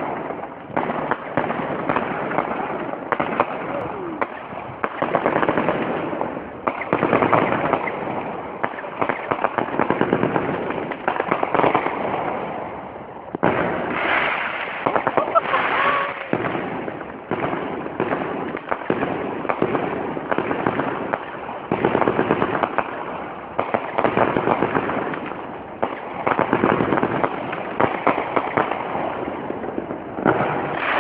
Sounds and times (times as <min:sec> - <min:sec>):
Fireworks: 0:00.0 - 0:31.0.